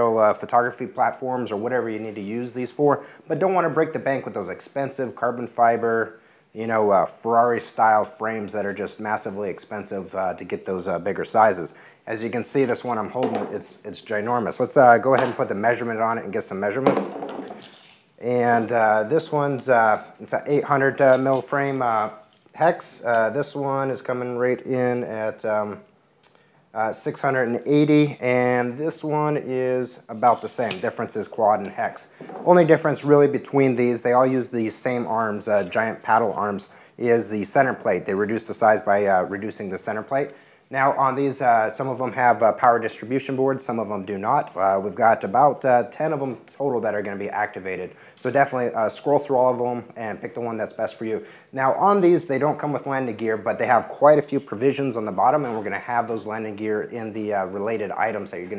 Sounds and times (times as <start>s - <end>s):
Speech: 0.0s - 17.1s, 18.2s - 25.9s, 26.8s - 58.5s.